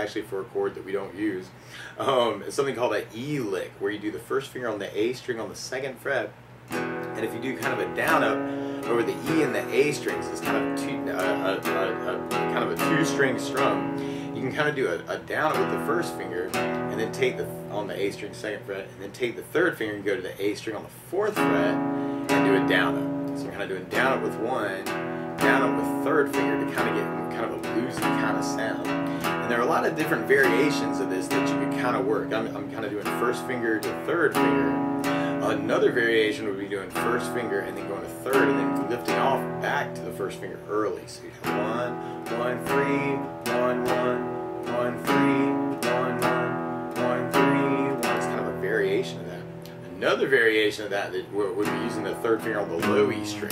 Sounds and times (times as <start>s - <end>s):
Speech: 0.0s - 6.4s, 7.2s - 46.4s, 47.0s - 53.5s
Strum: 6.7s - 53.5s.